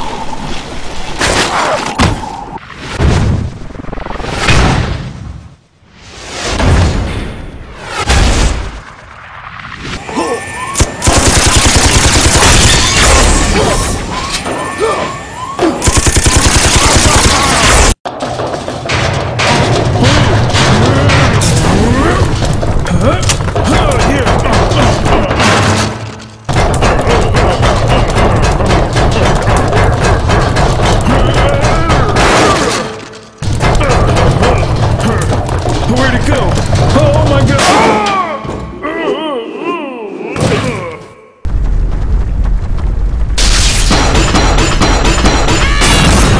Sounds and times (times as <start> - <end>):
Speech: 22.9 - 25.3, 35.9 - 41.1.